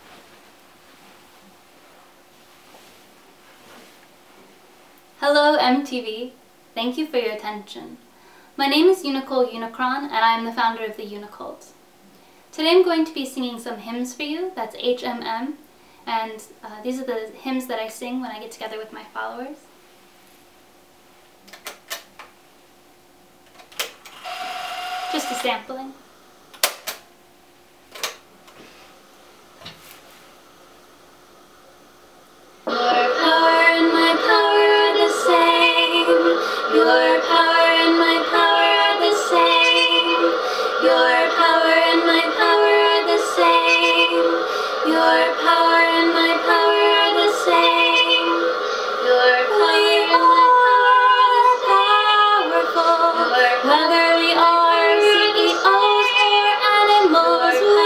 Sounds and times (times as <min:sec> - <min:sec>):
Inside, small room: 0:00.0 - 0:57.8
Speech: 0:05.2 - 0:08.0, 0:08.6 - 0:11.8, 0:12.6 - 0:19.7, 0:25.1 - 0:26.0.